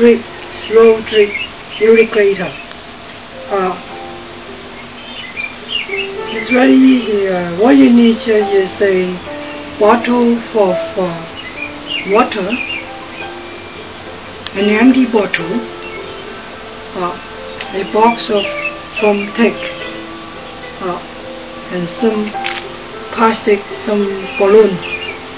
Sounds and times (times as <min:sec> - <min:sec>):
Speech: 0:00.0 - 0:02.6, 0:03.5 - 0:03.9, 0:06.3 - 0:09.2, 0:09.8 - 0:11.3, 0:12.1 - 0:12.6, 0:14.5 - 0:15.6, 0:17.0 - 0:19.7, 0:20.8 - 0:21.1, 0:21.7 - 0:22.4, 0:23.1 - 0:24.8
Music: 0:00.0 - 0:25.3.